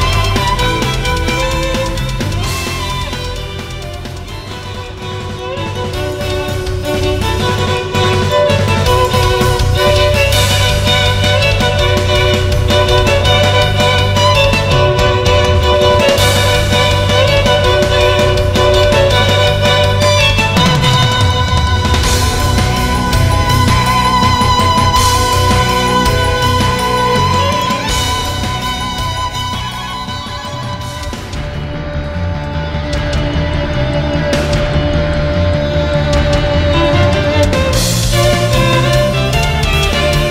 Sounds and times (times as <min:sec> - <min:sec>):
Musical instrument: 0:00.0 - 0:40.3.